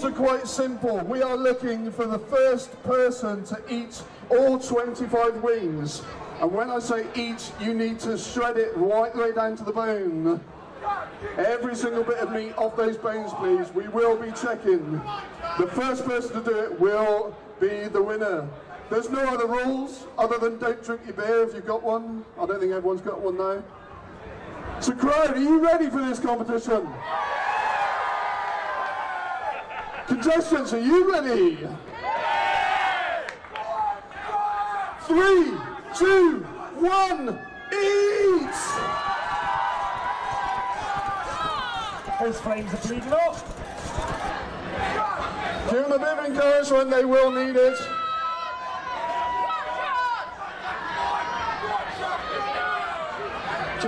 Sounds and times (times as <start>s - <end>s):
Speech: 0.0s - 23.7s, 24.8s - 27.0s, 30.1s - 31.8s, 35.0s - 38.8s, 42.2s - 43.4s, 45.7s - 47.9s.